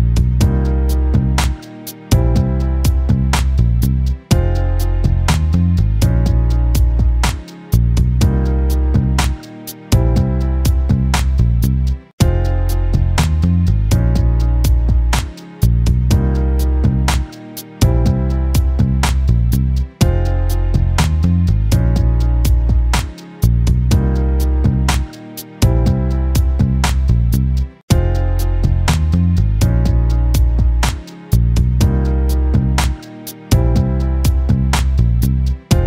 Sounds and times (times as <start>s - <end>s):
Music: 0.0s - 35.8s.